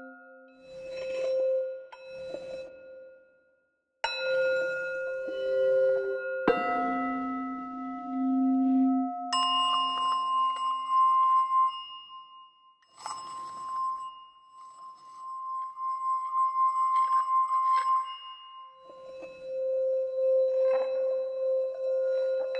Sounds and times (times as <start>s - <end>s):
Singing bowl: 0.0s - 3.3s, 4.0s - 22.5s.